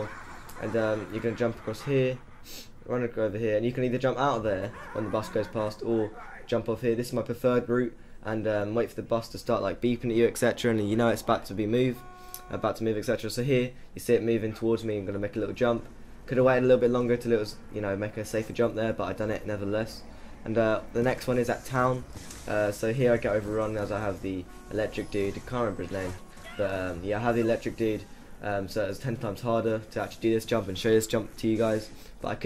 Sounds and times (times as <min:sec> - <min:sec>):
Speech: 0:00.0 - 0:02.2, 0:02.9 - 0:32.4.